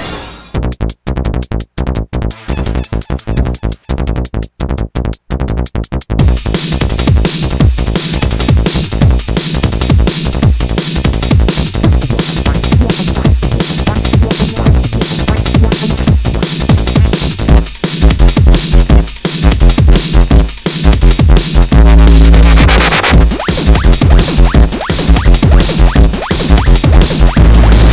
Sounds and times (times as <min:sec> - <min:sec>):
Music: 0:00.0 - 0:27.9.